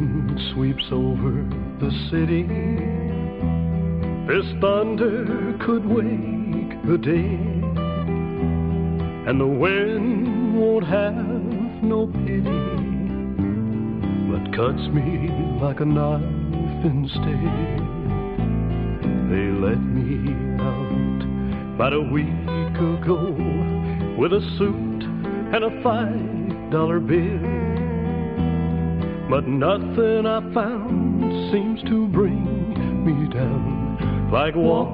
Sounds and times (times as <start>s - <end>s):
Music: 0.0s - 34.9s.